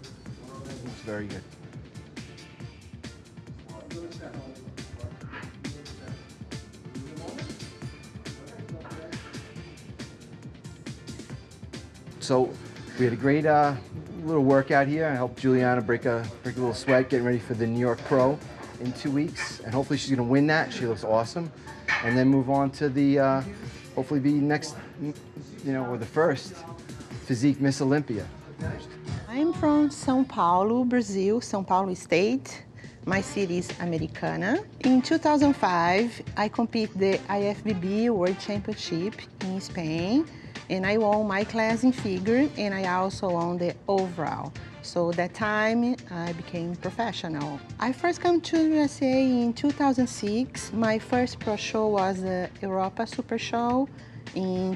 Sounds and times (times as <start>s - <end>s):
Music: 0.0s - 54.7s.